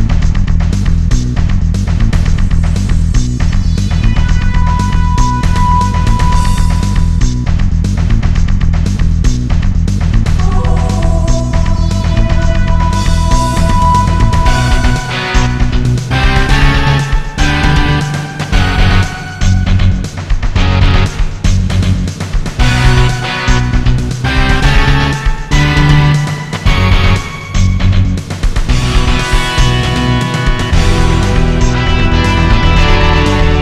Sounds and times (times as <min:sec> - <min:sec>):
Music: 0:00.0 - 0:33.6.